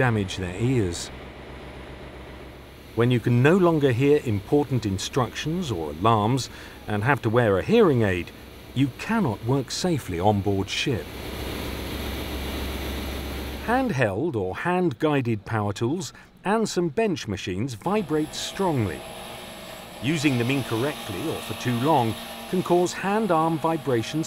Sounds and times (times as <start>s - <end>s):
Speech: 0.0s - 1.1s, 3.0s - 11.1s, 13.6s - 19.0s, 20.0s - 24.2s
White noise: 0.0s - 14.1s, 17.8s - 24.2s.